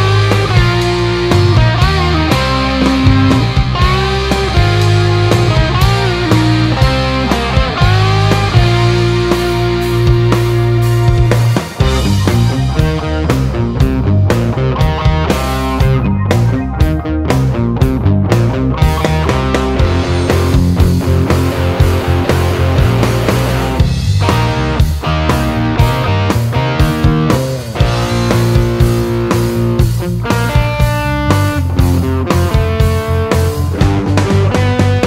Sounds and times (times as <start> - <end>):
Electric guitar: 0.0 - 35.0.